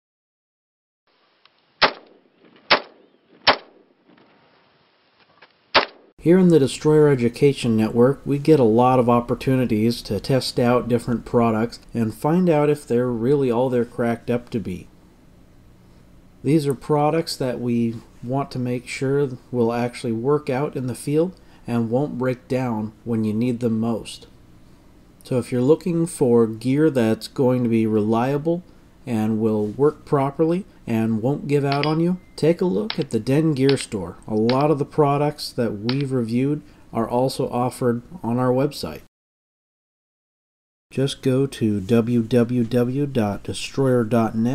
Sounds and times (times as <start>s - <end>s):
Gunshot, gunfire: 1.8s - 3.9s, 5.8s - 6.1s.